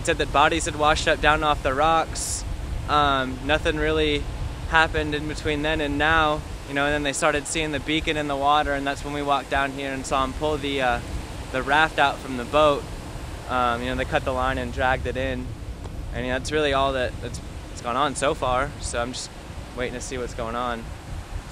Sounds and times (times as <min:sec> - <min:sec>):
Speech: 0:00.0 - 0:11.0, 0:11.6 - 0:12.8, 0:13.5 - 0:15.5, 0:16.2 - 0:20.9
Waves, surf: 0:00.0 - 0:21.5.